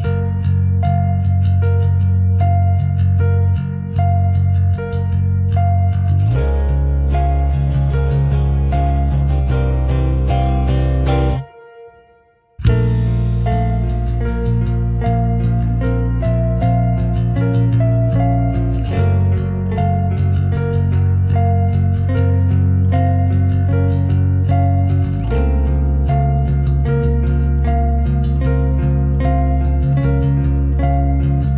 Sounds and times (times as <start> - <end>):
Music: 0.0 - 31.5.